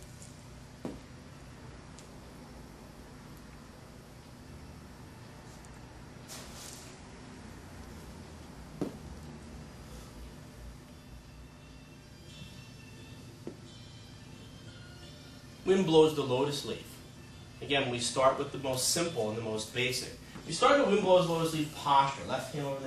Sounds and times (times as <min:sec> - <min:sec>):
Music: 0:10.1 - 0:22.8.